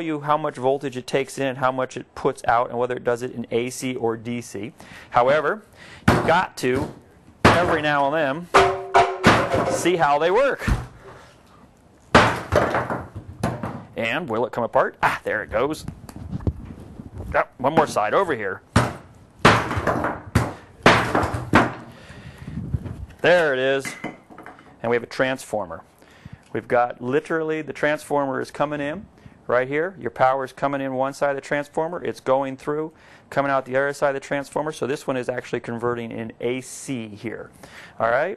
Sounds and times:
Speech: 0.0s - 5.6s, 6.2s - 8.5s, 9.7s - 10.8s, 14.0s - 15.9s, 17.3s - 18.6s, 23.2s - 24.0s, 24.8s - 25.9s, 26.5s - 38.3s.

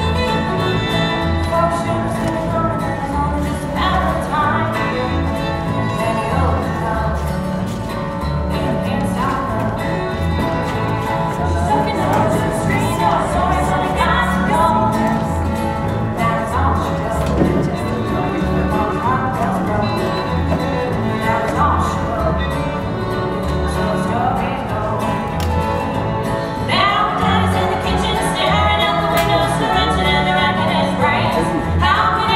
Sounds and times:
Violin, fiddle: 0.0s - 32.3s.

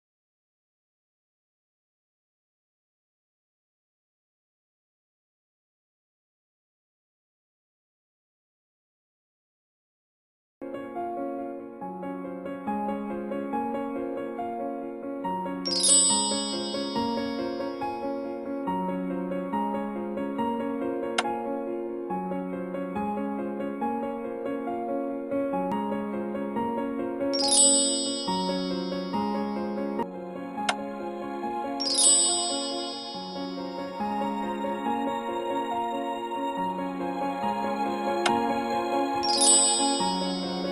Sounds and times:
Music: 10.6s - 40.7s.

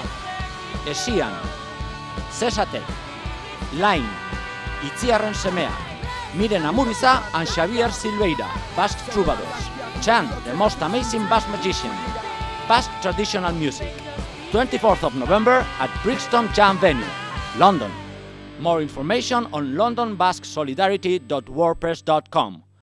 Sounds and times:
Music: 0.0s - 22.8s
Speech: 0.9s - 1.5s, 2.4s - 2.9s, 3.7s - 4.2s, 4.8s - 13.9s, 14.6s - 18.0s, 18.6s - 22.7s.

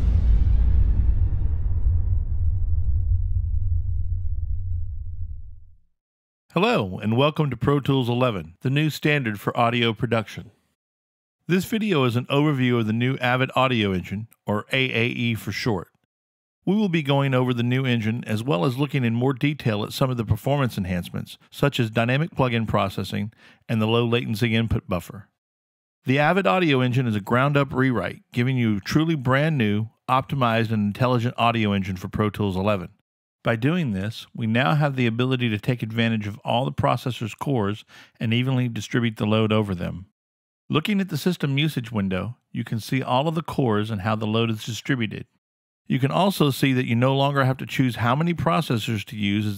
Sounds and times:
Speech: 6.5s - 10.6s, 11.5s - 16.0s, 16.7s - 25.4s, 26.1s - 40.1s, 40.7s - 49.5s.

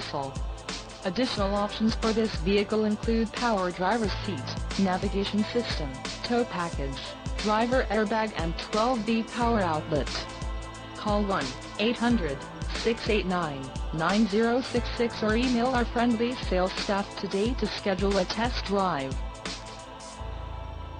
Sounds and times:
Speech: 0.0s - 0.4s, 1.1s - 10.3s, 11.0s - 19.2s
Music: 0.0s - 20.9s.

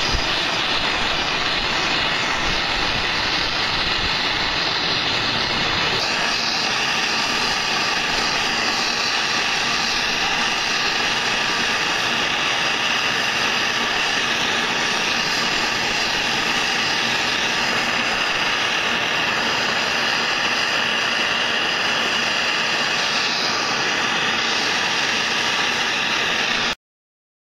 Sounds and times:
Jet engine: 0.0s - 26.8s.

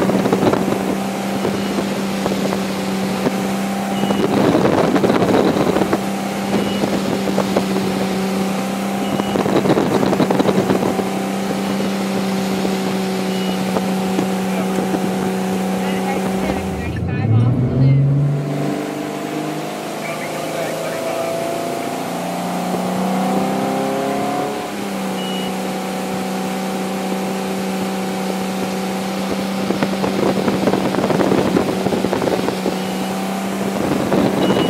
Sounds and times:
Motorboat, speedboat: 0.0s - 34.6s.

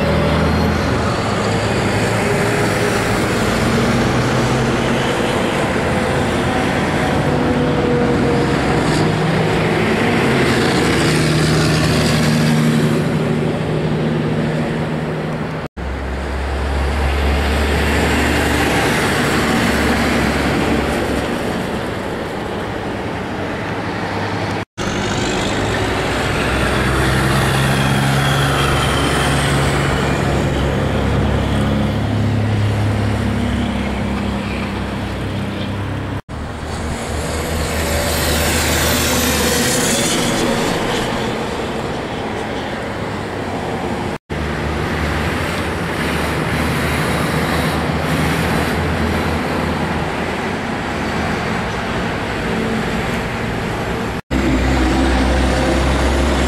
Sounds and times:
Heavy engine (low frequency): 0.0s - 56.4s
Outside, urban or manmade: 0.0s - 56.4s
Truck: 0.0s - 56.4s.

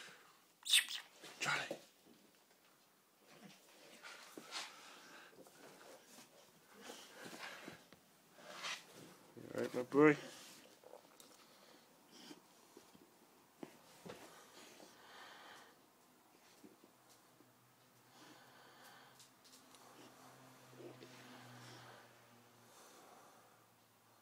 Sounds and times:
Speech: 9.5s - 10.3s.

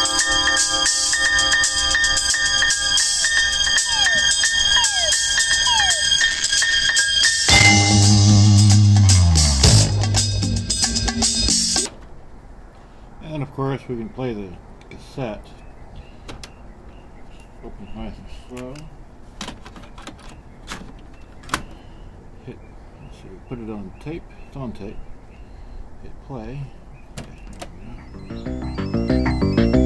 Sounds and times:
Music: 0.0s - 11.9s, 28.1s - 29.8s
Speech: 13.2s - 15.6s, 17.6s - 19.0s, 22.4s - 25.0s, 26.0s - 28.0s.

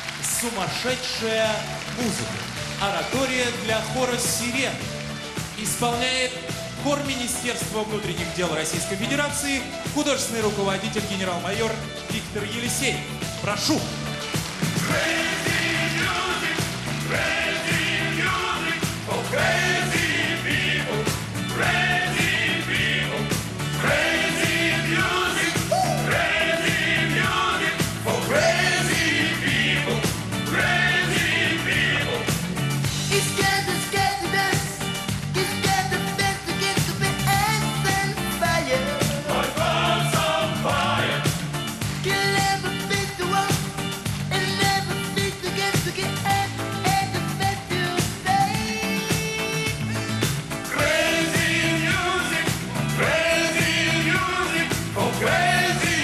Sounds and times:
Music: 0.0s - 56.0s.

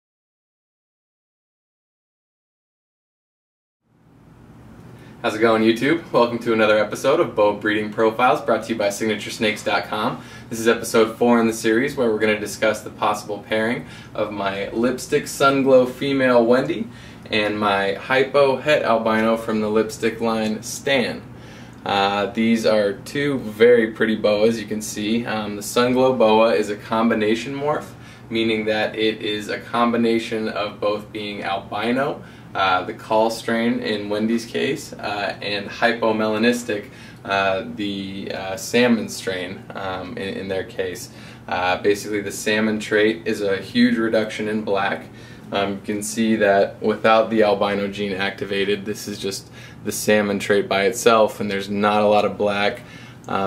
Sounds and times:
Speech: 5.2s - 53.4s.

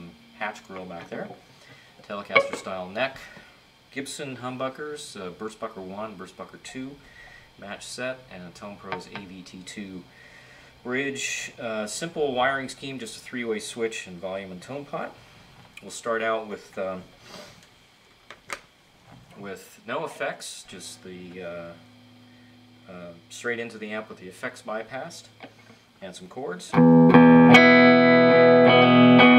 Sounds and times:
Speech: 0.0s - 1.4s, 2.0s - 7.0s, 7.6s - 10.1s, 10.8s - 15.2s, 15.8s - 17.1s, 19.4s - 21.8s, 22.9s - 25.4s, 26.0s - 26.8s
Electric guitar: 1.8s - 3.4s, 26.7s - 29.3s.

